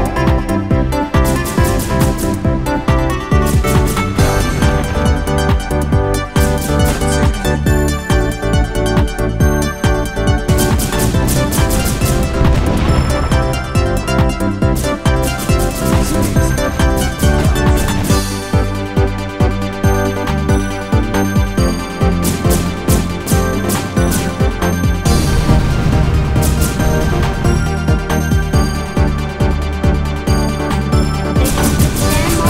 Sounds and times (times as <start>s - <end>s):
Music: 0.0s - 32.4s.